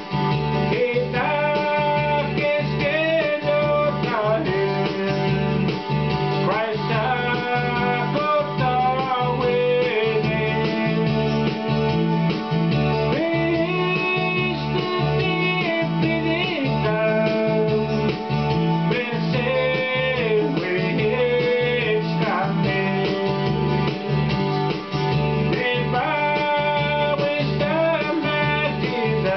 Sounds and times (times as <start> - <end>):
Music: 0.0 - 29.3
Male singing: 0.7 - 5.5, 6.4 - 11.2, 13.1 - 18.2, 18.9 - 23.7, 25.5 - 29.3.